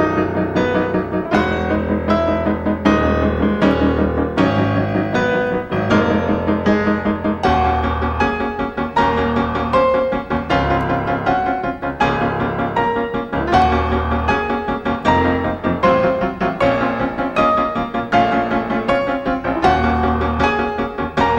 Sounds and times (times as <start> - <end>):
Music: 0.0 - 21.3.